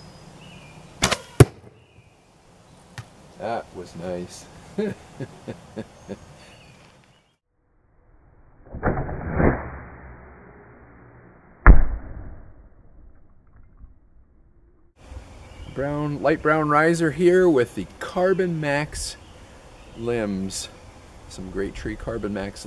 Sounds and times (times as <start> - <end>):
Speech: 3.4 - 4.9, 15.8 - 19.2, 20.0 - 22.6.